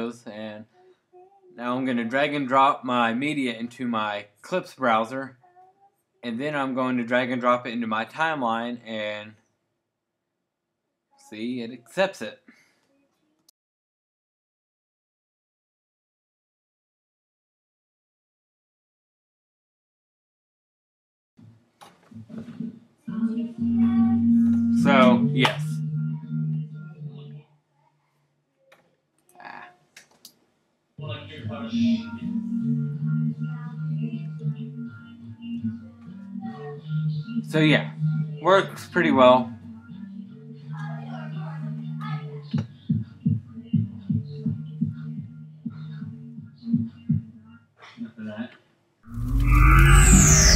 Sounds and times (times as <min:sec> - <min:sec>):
Music: 0:22.1 - 0:27.5, 0:31.0 - 0:48.5.